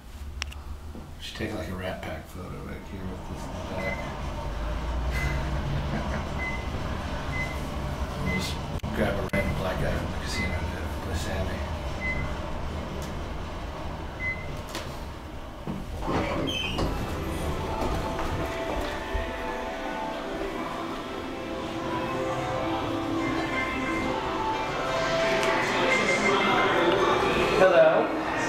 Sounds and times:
Music: 17.1s - 28.4s.

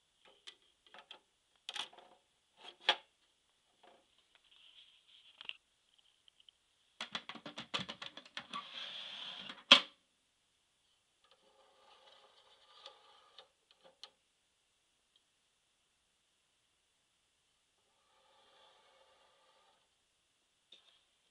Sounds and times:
Inside, small room: 0.0s - 21.3s.

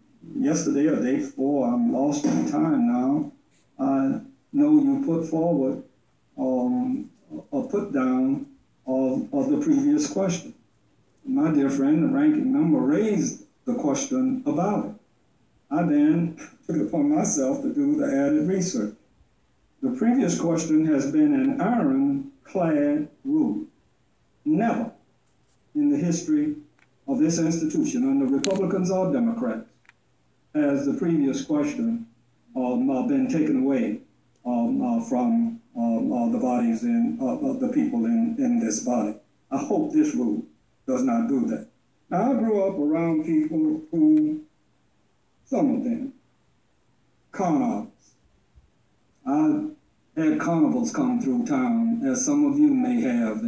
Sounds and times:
Narration, monologue: 0.0s - 53.4s
Male speech, man speaking: 0.2s - 10.6s, 11.3s - 15.0s, 15.7s - 19.0s, 19.8s - 23.7s, 24.5s - 25.0s, 25.8s - 29.7s, 30.5s - 44.5s, 45.5s - 46.2s, 47.4s - 48.0s, 49.2s - 53.4s.

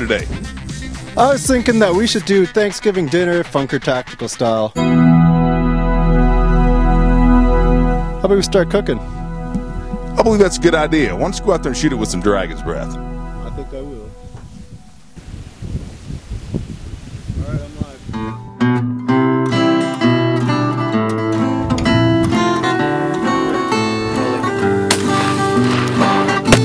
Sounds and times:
Speech: 0.0s - 0.4s, 1.2s - 4.8s, 8.2s - 9.0s, 10.2s - 14.1s, 17.4s - 18.1s
Acoustic guitar: 4.8s - 13.4s, 18.2s - 26.6s
Strum: 4.8s - 15.2s, 18.4s - 26.6s.

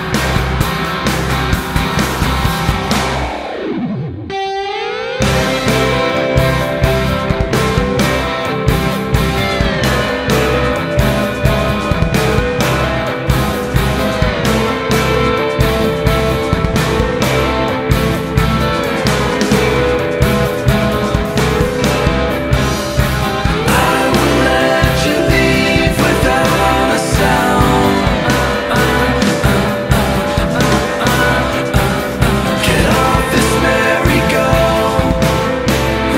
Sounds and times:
Music: 0.0s - 36.1s.

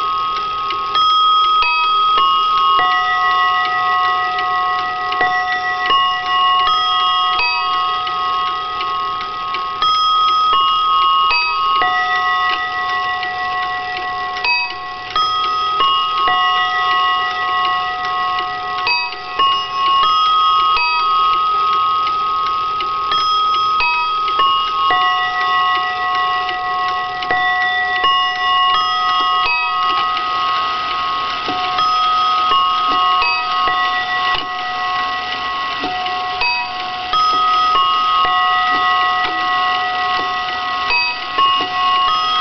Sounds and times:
Chime: 0.0s - 42.4s.

